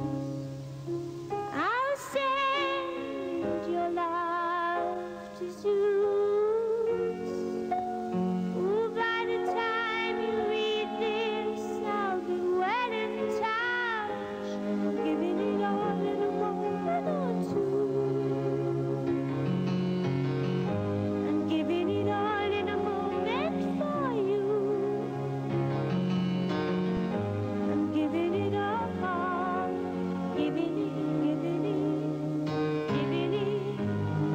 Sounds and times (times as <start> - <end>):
Music: 0.0 - 34.3.